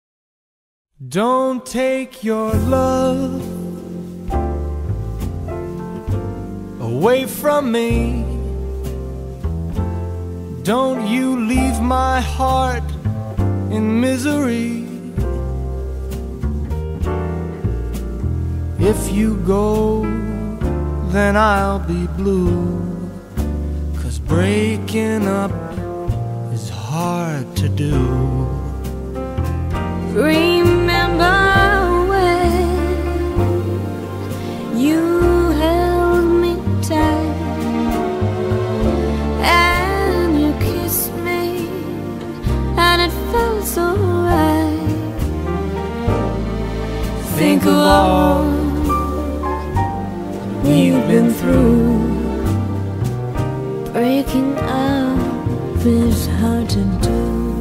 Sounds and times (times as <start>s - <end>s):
Music: 1.1s - 57.6s.